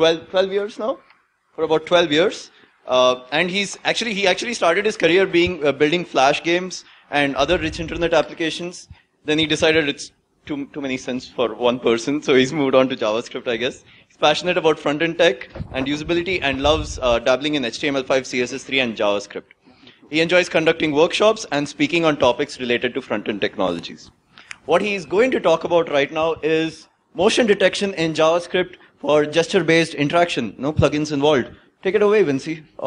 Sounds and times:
Speech: 0:00.0 - 0:01.0, 0:01.6 - 0:32.8.

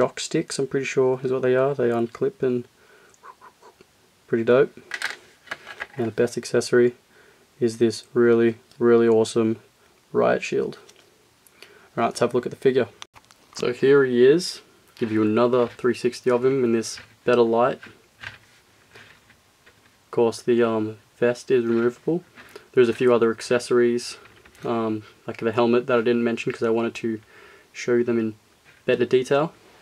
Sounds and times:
Speech: 0:00.0 - 0:02.7, 0:04.3 - 0:04.8, 0:06.0 - 0:07.0, 0:07.6 - 0:10.9, 0:12.0 - 0:13.0, 0:13.6 - 0:18.0, 0:20.1 - 0:27.2, 0:27.8 - 0:29.6.

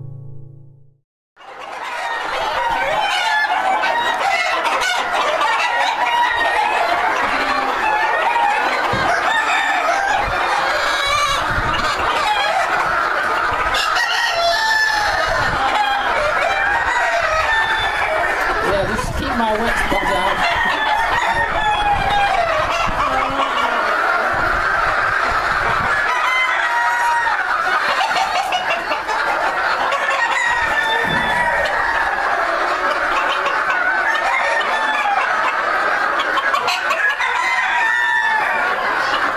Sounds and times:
Cluck: 0:01.4 - 0:39.3.

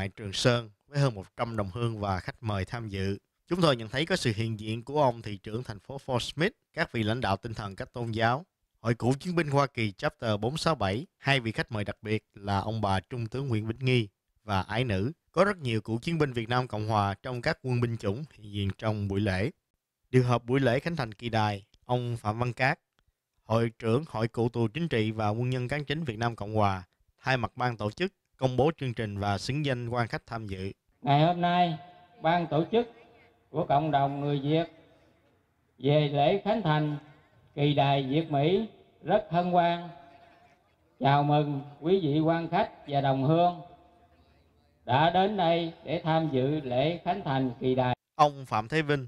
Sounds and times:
Speech: 0:00.0 - 0:22.8, 0:23.4 - 0:34.9, 0:35.8 - 0:49.0.

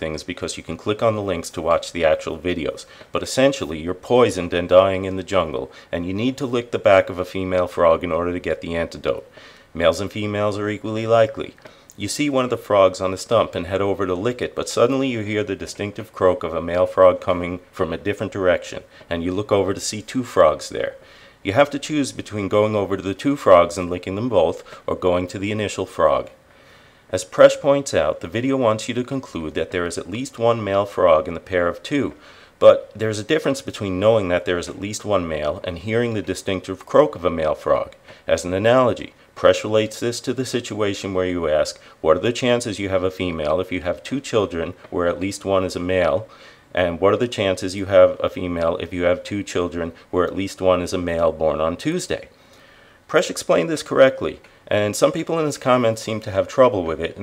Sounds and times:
Speech: 0:00.0 - 0:26.4, 0:27.1 - 0:52.3, 0:53.1 - 0:57.2.

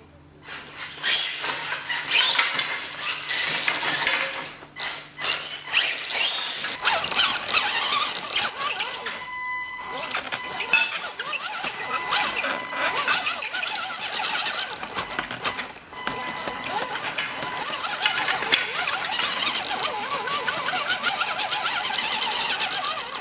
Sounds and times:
Inside, small room: 0:00.0 - 0:23.2.

